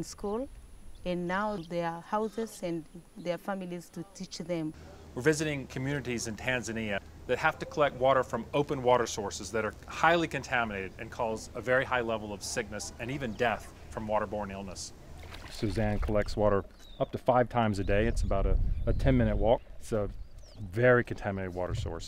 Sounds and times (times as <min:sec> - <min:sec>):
Speech: 0:01.1 - 0:14.9, 0:15.6 - 0:22.0.